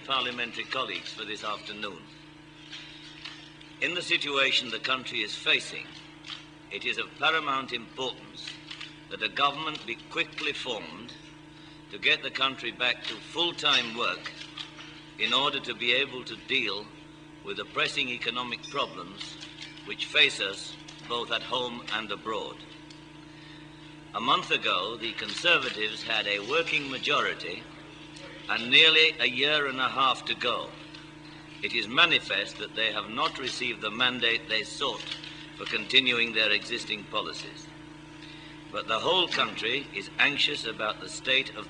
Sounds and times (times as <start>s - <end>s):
Male speech, man speaking: 0.0s - 2.1s, 3.8s - 5.9s, 6.7s - 8.5s, 9.1s - 11.2s, 11.9s - 14.3s, 15.2s - 22.6s, 24.2s - 27.7s, 28.3s - 30.8s, 31.6s - 37.7s, 38.8s - 41.6s
Narration, monologue: 0.0s - 41.6s.